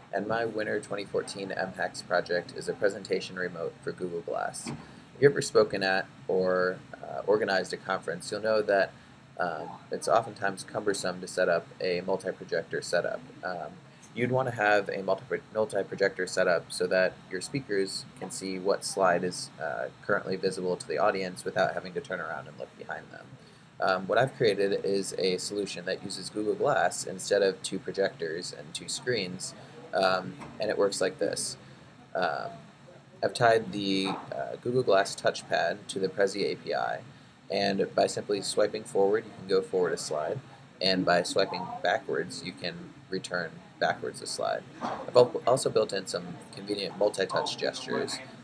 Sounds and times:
Speech: 0.0 - 31.6, 32.2 - 32.6, 33.2 - 48.4.

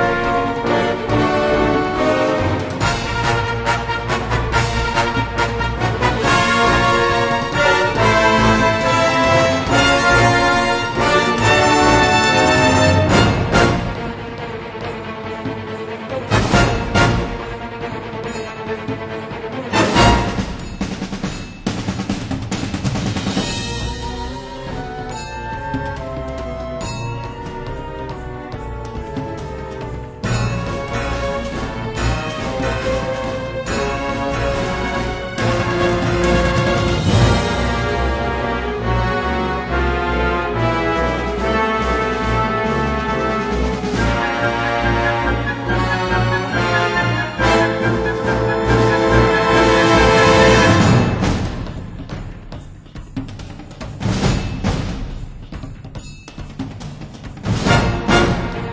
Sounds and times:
Music: 0.0 - 58.7.

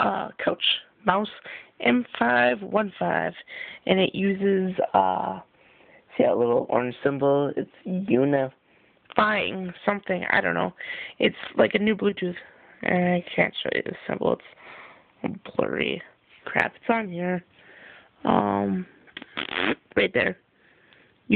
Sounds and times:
Speech: 0.0 - 5.5, 6.1 - 14.6, 15.2 - 17.5, 18.2 - 20.4.

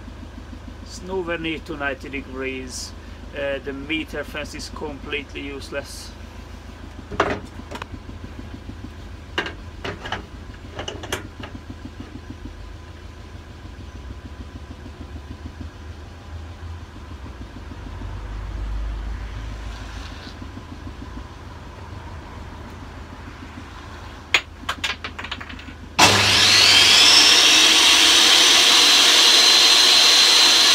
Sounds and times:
Speech: 0.9 - 6.2.

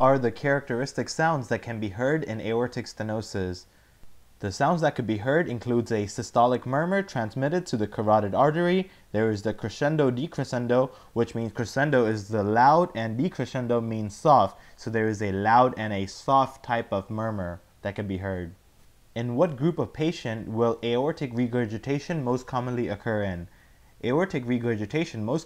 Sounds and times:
Speech: 0.0 - 3.7, 4.4 - 18.6, 19.2 - 25.4.

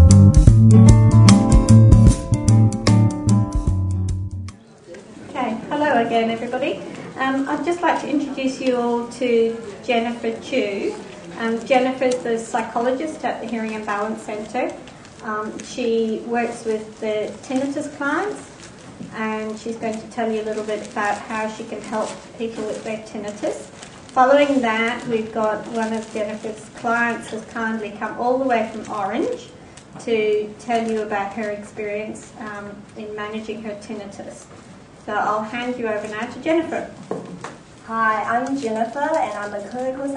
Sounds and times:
Inside, large room or hall: 0.0 - 3.4, 4.5 - 40.1
Speech: 4.6 - 18.5, 19.1 - 34.5, 35.1 - 37.0, 37.8 - 40.1
Crumpling, crinkling: 11.1 - 30.0, 36.0 - 40.1.

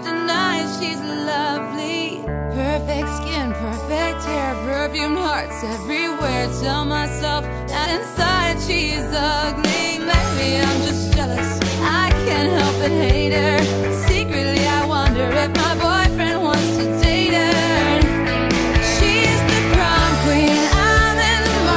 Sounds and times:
Music: 0.0 - 21.7.

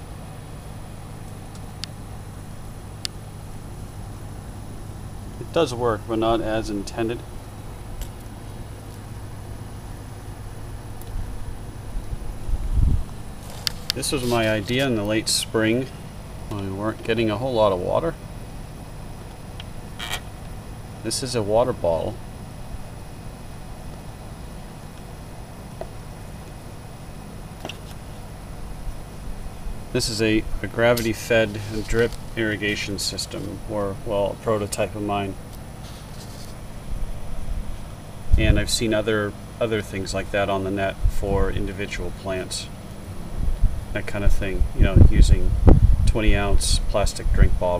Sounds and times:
Speech: 5.4 - 7.3, 14.0 - 15.9, 16.5 - 18.2, 21.0 - 22.2, 29.9 - 35.4, 38.3 - 42.7, 43.9 - 47.7.

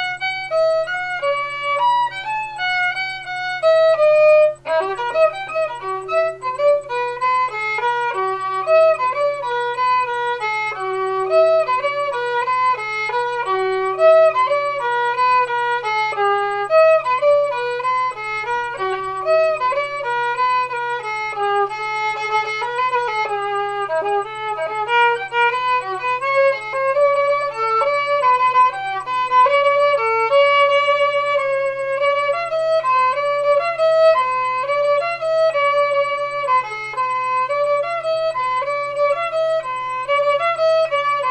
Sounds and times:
Violin, fiddle: 0.0 - 41.3.

